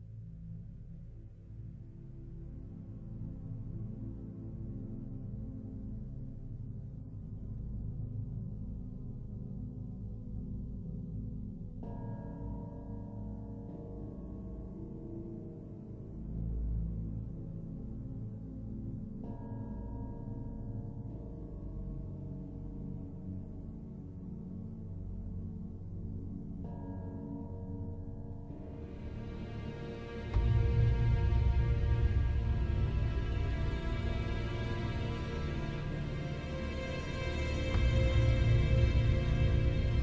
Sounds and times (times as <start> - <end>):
Music: 0.0 - 40.0.